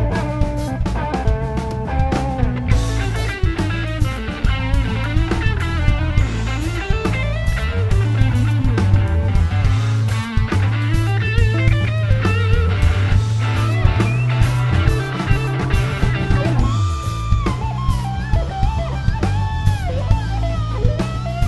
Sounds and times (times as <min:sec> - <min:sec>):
Psychedelic rock: 0:00.0 - 0:21.4.